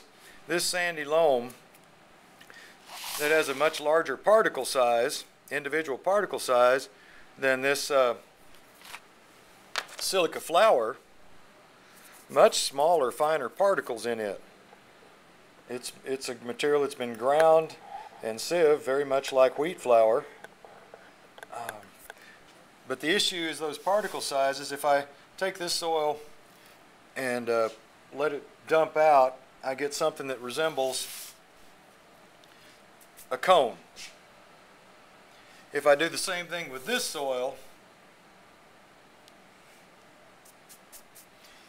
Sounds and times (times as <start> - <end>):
Speech: 0.0 - 1.6, 3.2 - 8.3, 10.0 - 11.0, 12.3 - 14.5, 15.7 - 20.4, 21.5 - 22.0, 22.9 - 26.3, 27.2 - 31.2, 33.3 - 34.2, 35.7 - 37.7.